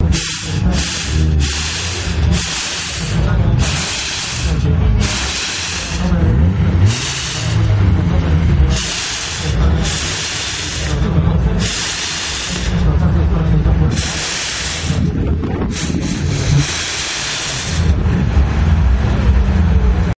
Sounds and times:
Speech: 0:00.0 - 0:01.5, 0:02.8 - 0:06.6, 0:07.3 - 0:15.4
Spray: 0:00.1 - 0:06.0, 0:06.9 - 0:07.6, 0:08.7 - 0:11.0, 0:11.6 - 0:12.8, 0:13.9 - 0:15.1, 0:15.7 - 0:18.0.

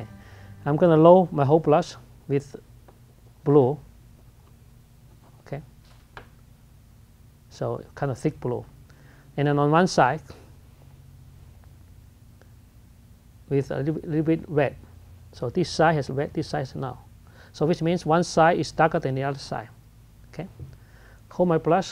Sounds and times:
Speech: 0:00.6 - 0:02.7, 0:03.4 - 0:03.9, 0:05.4 - 0:05.7, 0:07.5 - 0:08.7, 0:09.4 - 0:10.4, 0:13.5 - 0:20.7, 0:21.3 - 0:21.9.

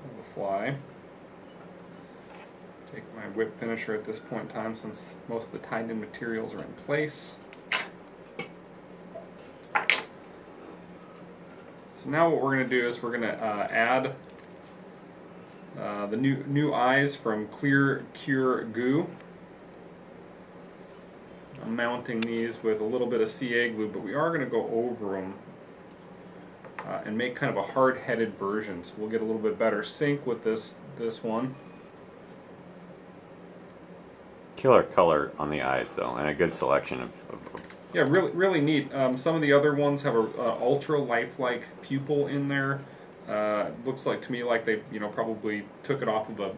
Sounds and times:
Speech: 0:00.0 - 0:00.9, 0:02.9 - 0:07.4, 0:11.9 - 0:14.2, 0:15.8 - 0:19.2, 0:21.6 - 0:25.4, 0:26.8 - 0:31.6, 0:34.6 - 0:37.3, 0:37.9 - 0:46.5.

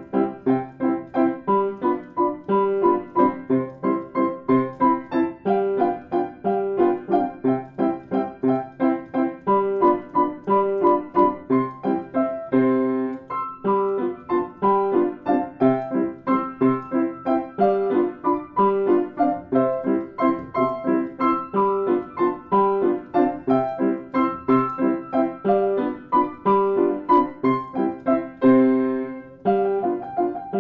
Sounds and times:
Music: 0:00.0 - 0:30.6.

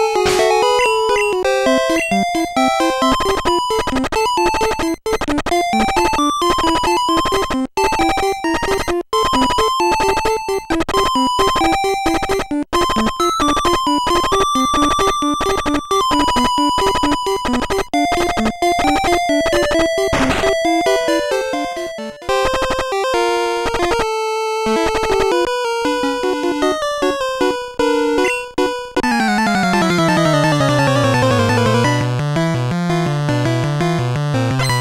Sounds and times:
Music: 0:00.0 - 0:34.8.

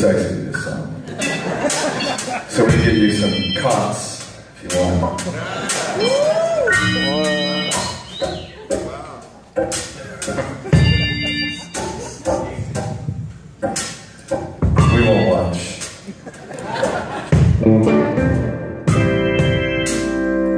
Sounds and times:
Speech: 0:00.0 - 0:01.0, 0:02.5 - 0:05.3, 0:14.8 - 0:15.9.

